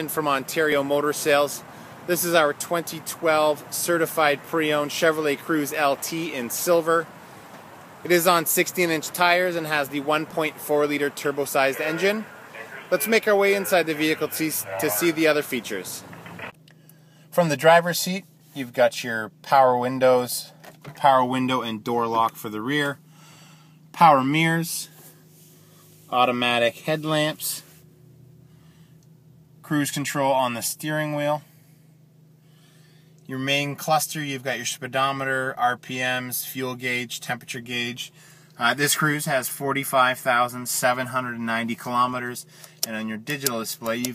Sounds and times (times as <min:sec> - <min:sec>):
Speech: 0:00.0 - 0:07.1, 0:08.1 - 0:16.1, 0:17.4 - 0:23.0, 0:24.0 - 0:25.0, 0:26.1 - 0:27.7, 0:29.6 - 0:31.4, 0:33.3 - 0:44.1.